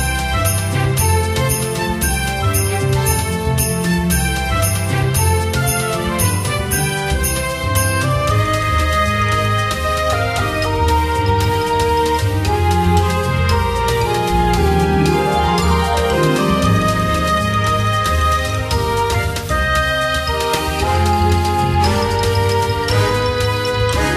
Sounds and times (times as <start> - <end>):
Rhythm and blues: 0.0 - 24.1.